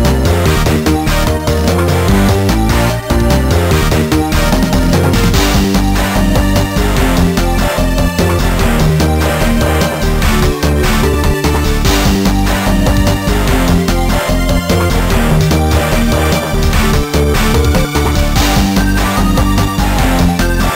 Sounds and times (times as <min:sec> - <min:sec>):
Video game music: 0:00.0 - 0:20.7.